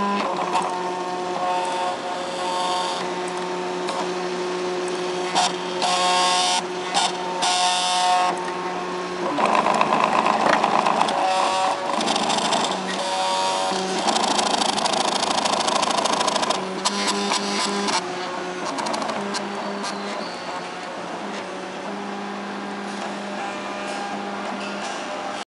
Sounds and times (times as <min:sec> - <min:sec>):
Printer: 0:00.0 - 0:25.4.